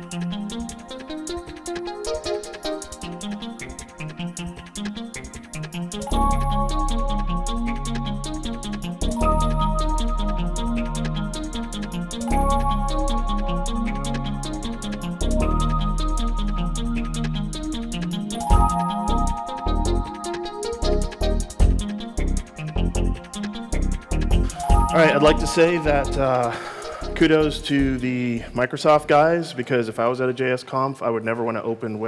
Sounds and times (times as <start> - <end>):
Music: 0.0 - 30.0
Speech: 24.8 - 32.0.